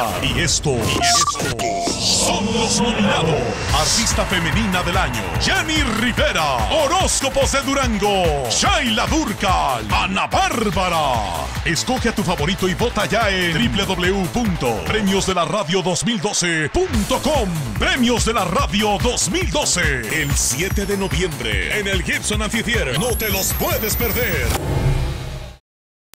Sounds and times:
Speech: 0:00.0 - 0:24.6
Music: 0:00.0 - 0:25.6.

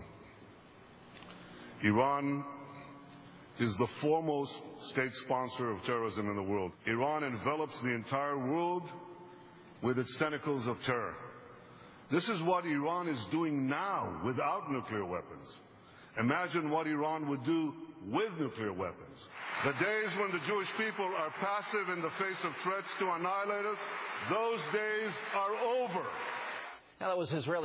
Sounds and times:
Narration, monologue: 0:00.0 - 0:27.6
Male speech, man speaking: 0:01.8 - 0:02.7, 0:03.6 - 0:09.1, 0:09.8 - 0:11.3, 0:12.1 - 0:15.6, 0:16.2 - 0:26.3, 0:27.0 - 0:27.6.

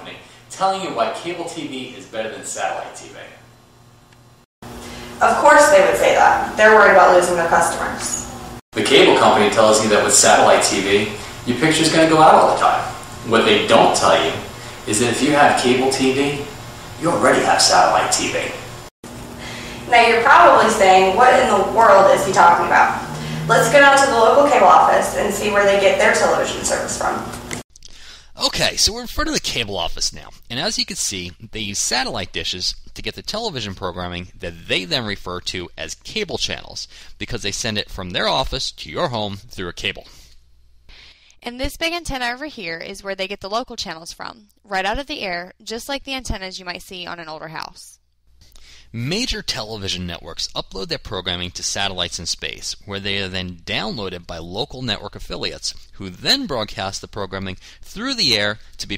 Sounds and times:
Speech: 0:00.0 - 0:03.4, 0:05.2 - 0:18.7, 0:19.9 - 0:27.3, 0:28.4 - 0:40.2, 0:41.4 - 0:48.0, 0:48.9 - 0:58.9
Television: 0:19.9 - 0:27.4.

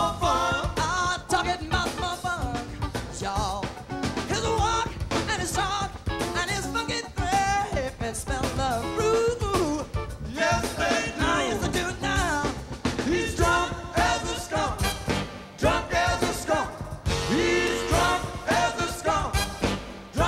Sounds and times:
Music: 0:00.0 - 0:20.2.

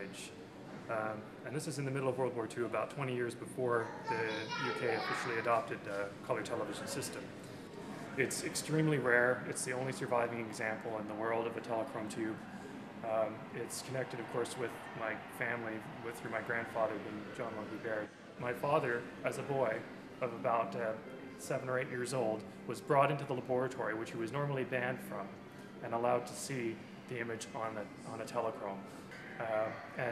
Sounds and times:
Speech: 0:00.0 - 0:07.2, 0:08.2 - 0:12.4, 0:13.0 - 0:28.8, 0:29.4 - 0:30.1.

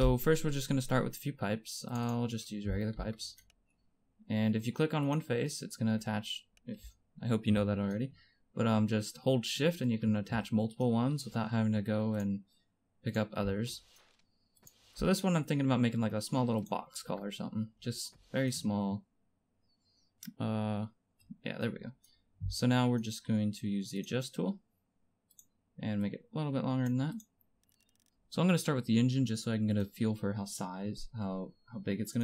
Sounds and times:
Speech: 0:00.0 - 0:03.4, 0:04.3 - 0:12.4, 0:13.0 - 0:13.8, 0:15.0 - 0:19.1, 0:20.2 - 0:24.6, 0:25.8 - 0:27.3, 0:28.3 - 0:32.2.

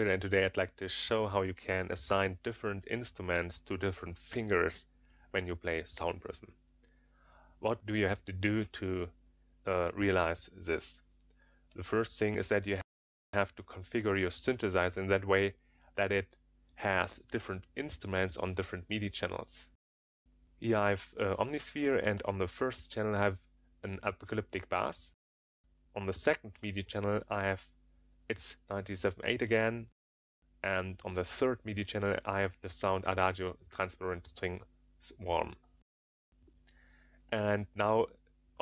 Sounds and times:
Speech: 0:00.0 - 0:06.5, 0:07.6 - 0:11.0, 0:11.8 - 0:19.8, 0:20.6 - 0:25.2, 0:26.0 - 0:27.7, 0:28.3 - 0:30.0, 0:30.6 - 0:35.6, 0:37.3 - 0:38.6.

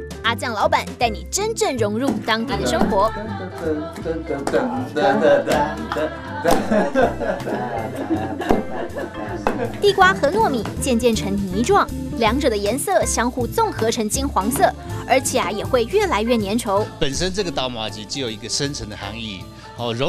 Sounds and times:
Music: 0:00.0 - 0:20.0
Speech: 0:00.3 - 0:03.4, 0:09.8 - 0:20.0.

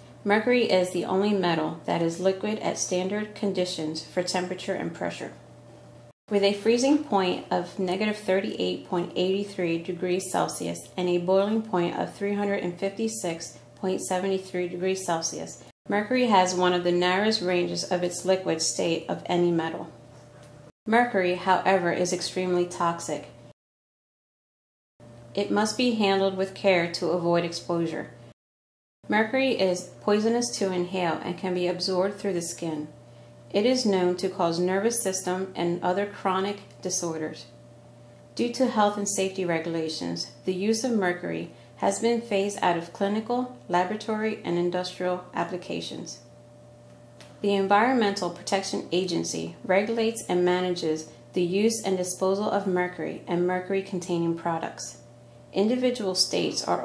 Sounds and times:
Speech: 0:00.3 - 0:05.4, 0:06.3 - 0:20.0, 0:20.9 - 0:23.4, 0:25.4 - 0:28.2, 0:29.1 - 0:32.9, 0:33.5 - 0:37.5, 0:38.4 - 0:46.2, 0:47.4 - 0:55.0, 0:55.6 - 0:56.8.

